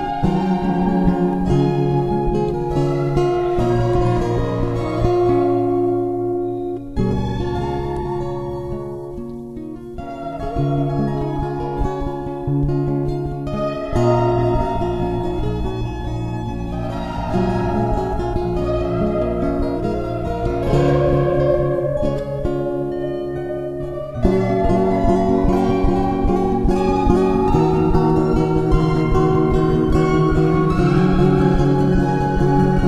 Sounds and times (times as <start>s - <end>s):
Music: 0.0s - 32.8s.